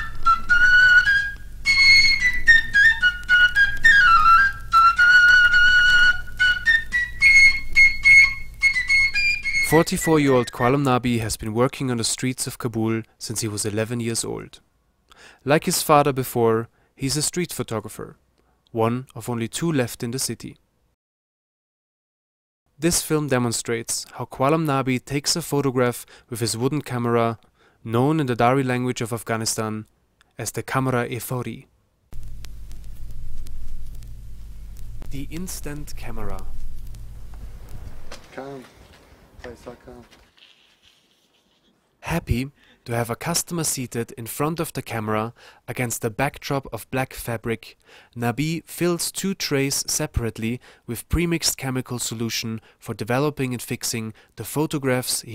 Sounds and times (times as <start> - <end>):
Speech: 9.7 - 14.6, 15.4 - 20.6, 22.8 - 31.7, 35.1 - 36.5, 38.3 - 38.8, 39.4 - 40.2, 42.0 - 55.3.